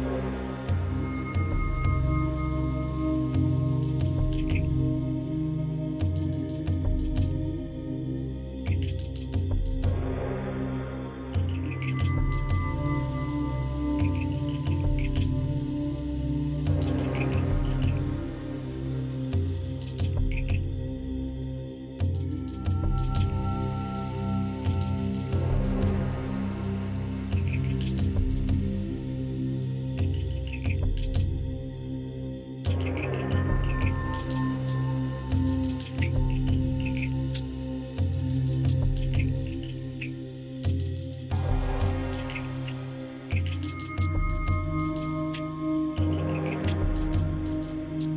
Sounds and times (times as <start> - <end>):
Music: 0.0 - 48.1.